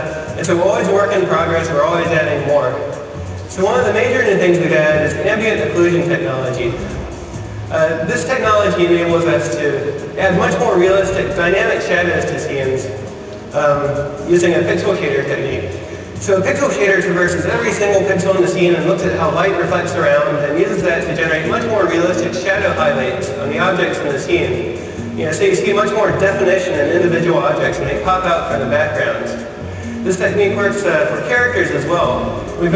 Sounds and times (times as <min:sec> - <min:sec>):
Speech: 0:00.0 - 0:07.0, 0:07.7 - 0:32.7
Music: 0:00.0 - 0:32.7.